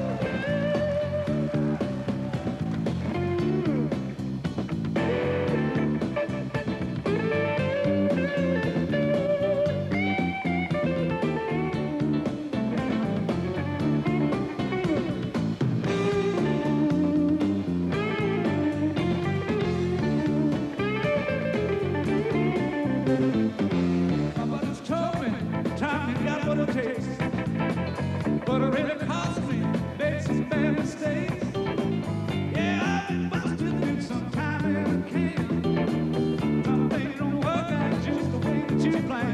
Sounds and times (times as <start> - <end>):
Blues: 0.0 - 39.3
Electric guitar: 0.0 - 39.3.